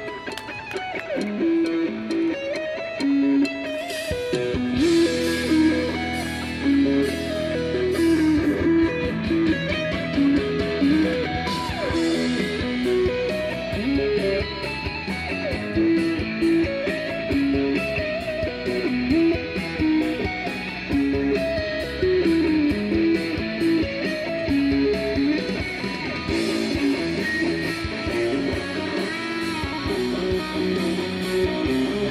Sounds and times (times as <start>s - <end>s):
Electric guitar: 0.0s - 32.1s.